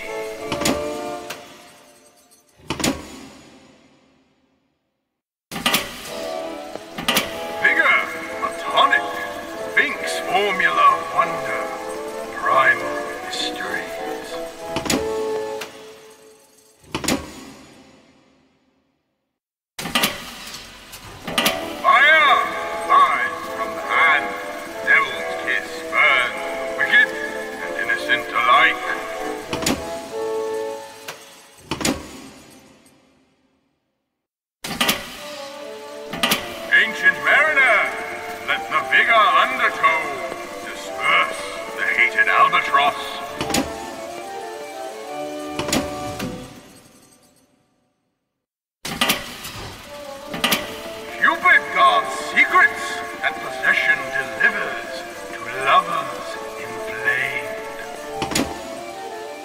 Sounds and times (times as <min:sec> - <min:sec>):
Music: 0:00.0 - 0:04.4, 0:05.6 - 0:19.0, 0:20.3 - 0:33.5, 0:34.8 - 0:47.5, 0:49.1 - 0:59.4
Speech: 0:07.6 - 0:14.4, 0:21.8 - 0:29.3, 0:36.7 - 0:43.6, 0:51.1 - 0:57.9.